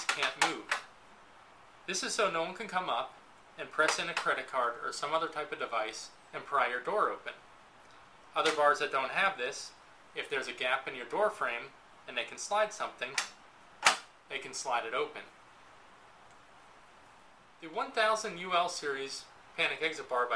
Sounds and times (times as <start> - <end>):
Speech: 0.0 - 0.8, 1.9 - 7.4, 8.3 - 13.4, 14.3 - 15.3, 17.6 - 20.3.